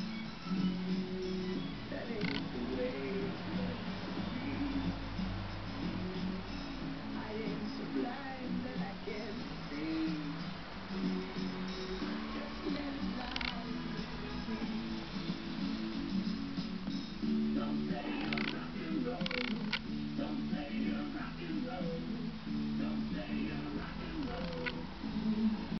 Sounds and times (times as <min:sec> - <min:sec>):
Music: 0:00.0 - 0:25.7.